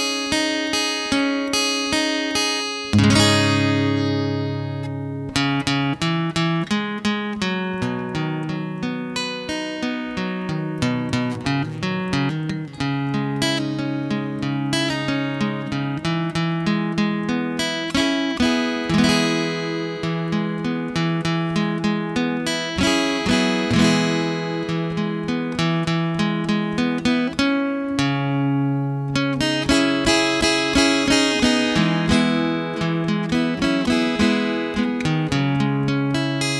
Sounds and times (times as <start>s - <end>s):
Music: 0.0s - 36.5s.